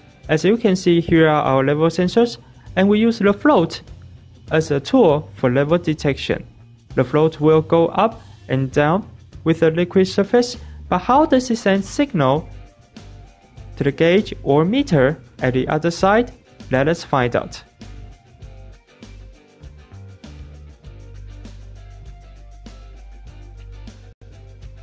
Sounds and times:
Music: 0:00.0 - 0:24.8
Speech: 0:00.3 - 0:03.9, 0:04.5 - 0:12.5, 0:13.8 - 0:17.7.

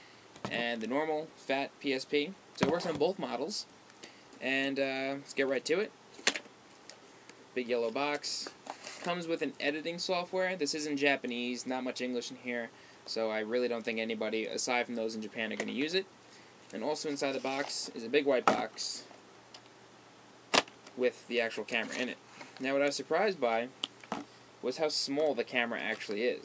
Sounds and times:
Speech: 0:00.5 - 0:03.7, 0:04.4 - 0:05.9, 0:07.6 - 0:16.1, 0:16.7 - 0:19.1, 0:21.0 - 0:23.7, 0:24.6 - 0:26.4.

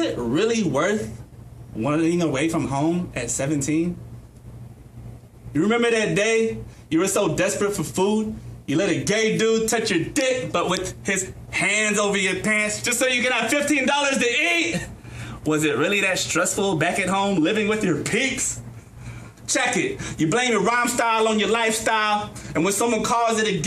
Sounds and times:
Speech: 0:00.0 - 0:01.2, 0:01.8 - 0:04.0, 0:05.5 - 0:18.6, 0:19.5 - 0:23.6.

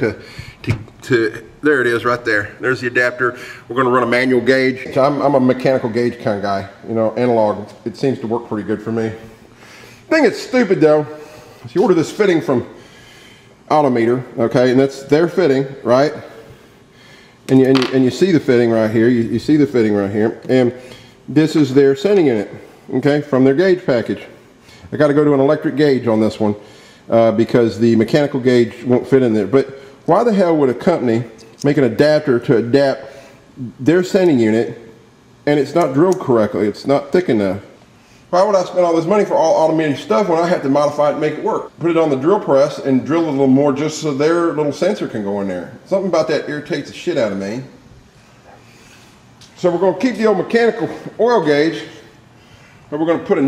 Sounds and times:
Speech: 0:00.0 - 0:09.3, 0:10.1 - 0:12.8, 0:13.7 - 0:16.4, 0:17.5 - 0:47.8, 0:49.5 - 0:52.1, 0:52.9 - 0:53.4.

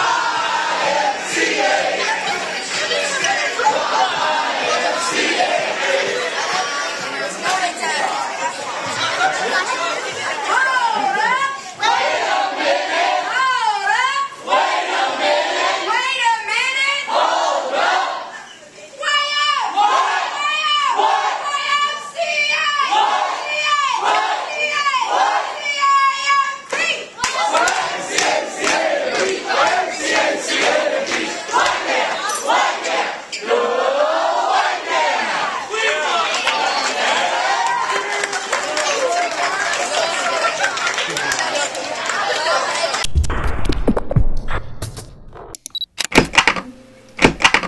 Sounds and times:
Crowd: 0:00.0 - 0:44.1
Speech: 0:01.6 - 0:12.5, 0:18.2 - 0:32.6, 0:35.2 - 0:43.1.

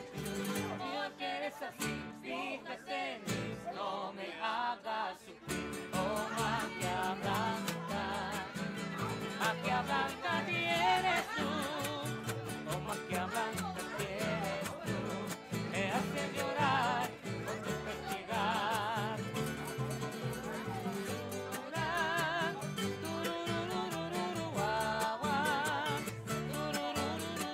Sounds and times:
Music: 0:00.0 - 0:02.5, 0:03.2 - 0:03.7, 0:05.4 - 0:27.5
Speech: 0:05.2 - 0:27.5.

